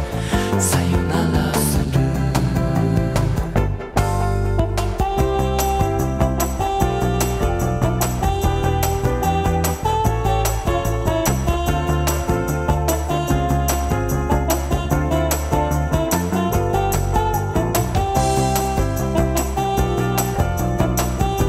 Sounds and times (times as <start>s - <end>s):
Electric guitar: 0.0s - 21.4s.